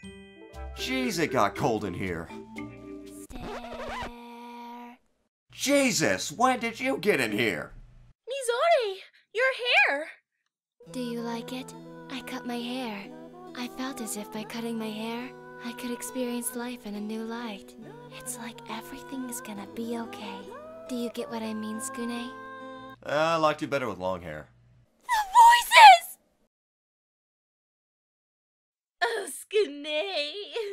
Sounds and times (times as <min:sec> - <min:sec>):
Music: 0:00.0 - 0:03.4, 0:10.8 - 0:23.3
Speech: 0:00.8 - 0:02.3, 0:05.6 - 0:07.7, 0:23.0 - 0:24.5, 0:29.0 - 0:30.7.